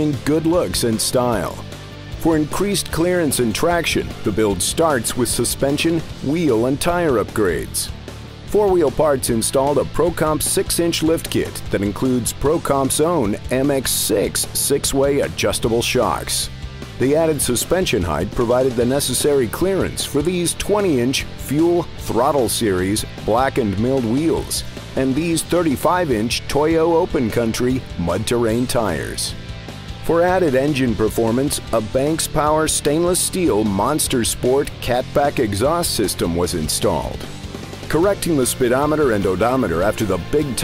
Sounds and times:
Speech: 0.0 - 1.6, 2.2 - 7.9, 8.5 - 29.4, 30.0 - 37.3, 37.9 - 40.6
Music: 0.0 - 40.6.

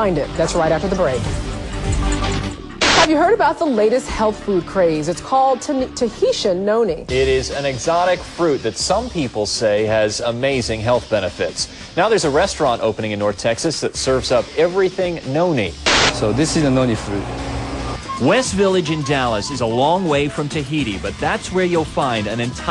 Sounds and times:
Speech: 0.0 - 1.3, 3.1 - 17.2, 18.2 - 22.7
Music: 0.0 - 22.7
Television: 2.8 - 6.9, 9.3 - 17.2.

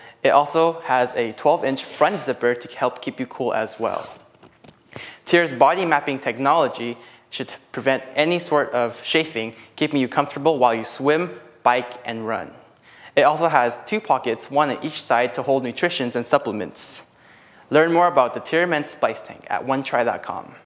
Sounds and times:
Speech: 0.2 - 4.2, 5.3 - 12.6, 13.2 - 17.1, 17.7 - 20.6.

